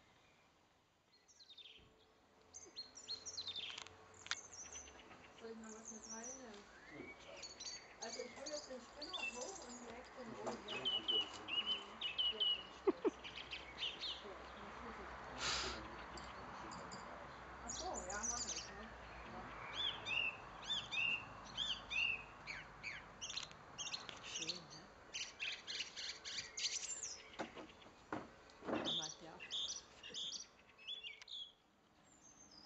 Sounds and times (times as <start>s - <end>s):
Chirp, tweet: 0.0s - 15.0s, 15.8s - 28.0s, 28.7s - 32.6s.